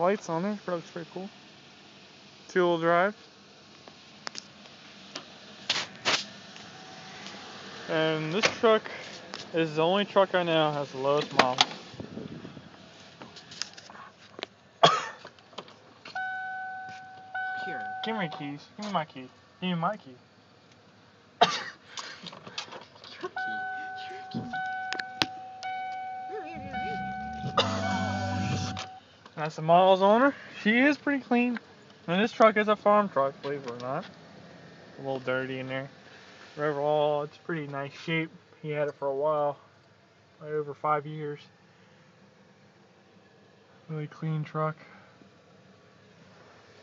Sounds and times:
Speech: 0.0 - 1.3, 2.5 - 3.2, 7.9 - 11.7, 17.6 - 20.2, 26.3 - 27.1, 29.4 - 34.1, 35.0 - 35.9, 36.6 - 39.6, 40.4 - 41.5, 43.9 - 44.9.

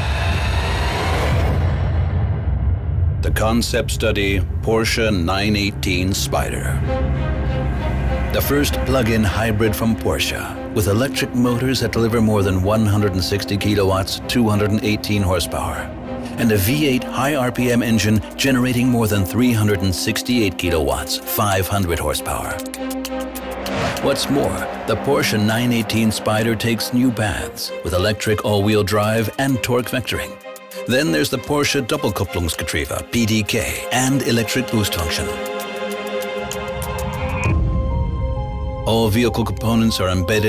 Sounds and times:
Music: 0.0 - 40.4
Speech: 3.2 - 6.8, 8.3 - 22.8, 23.9 - 35.4, 38.8 - 40.4.

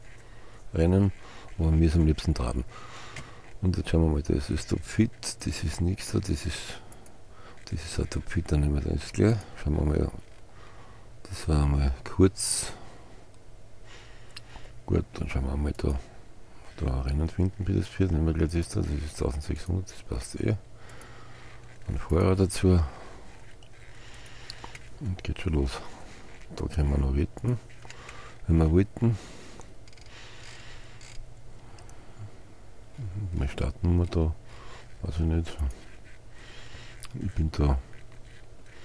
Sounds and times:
Speech: 0.7 - 2.7, 3.6 - 6.8, 7.7 - 10.2, 11.2 - 12.8, 14.9 - 16.1, 16.8 - 20.6, 21.9 - 23.0, 25.0 - 25.9, 26.5 - 27.6, 28.4 - 29.2, 33.0 - 34.4, 35.0 - 35.8, 37.1 - 37.9.

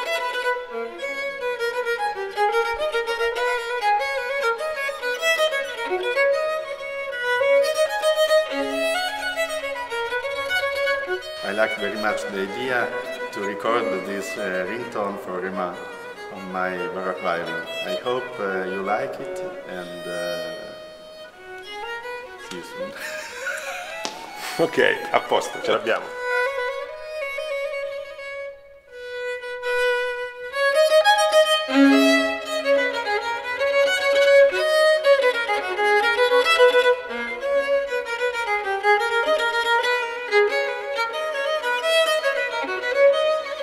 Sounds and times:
Violin, fiddle: 0.0 - 43.6
Speech: 11.4 - 20.8, 22.5 - 22.9, 24.6 - 26.1.

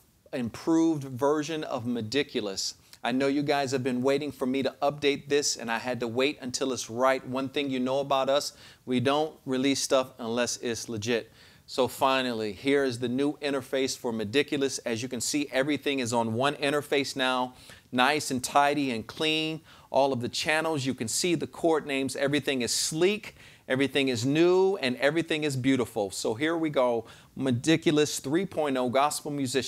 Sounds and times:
Speech: 0.3 - 29.6.

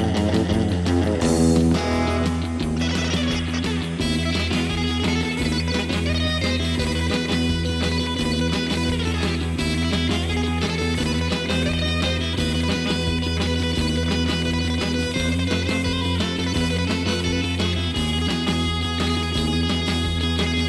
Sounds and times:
Electric guitar: 0.0 - 20.6.

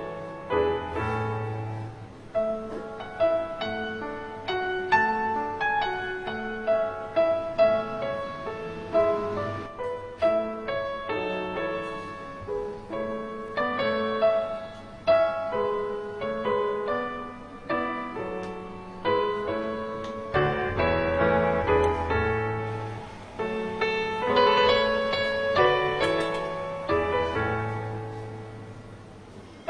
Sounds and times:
Music: 0.0 - 29.6.

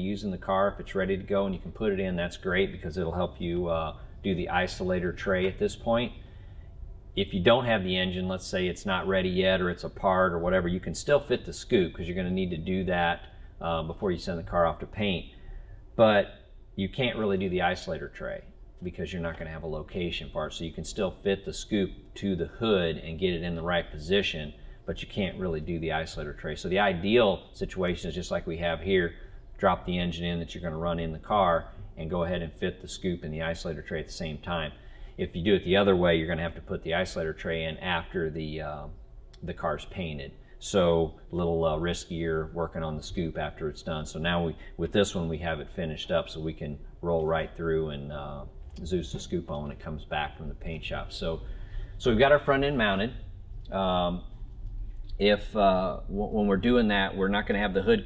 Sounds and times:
Speech: 0.0 - 6.2, 7.2 - 15.4, 16.0 - 54.3, 55.2 - 58.0.

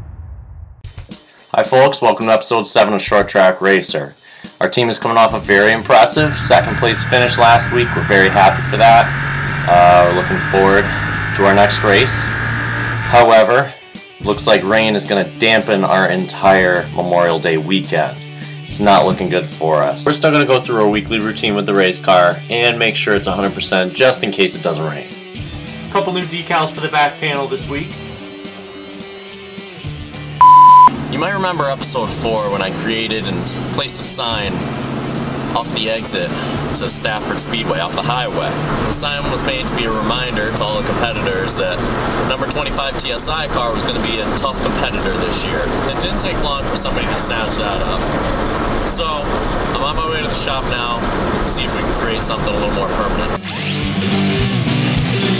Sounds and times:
Music: 0.9 - 55.3
Speech: 1.5 - 9.1, 9.7 - 12.3, 13.1 - 25.2, 25.9 - 28.0, 31.1 - 34.6, 35.6 - 48.1, 48.9 - 53.4.

